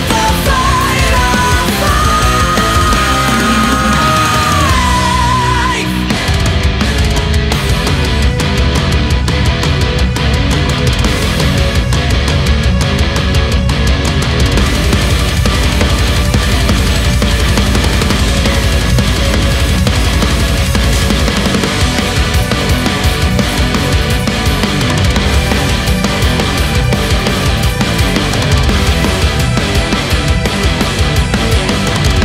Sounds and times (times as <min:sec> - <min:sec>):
Music: 0:00.0 - 0:32.2.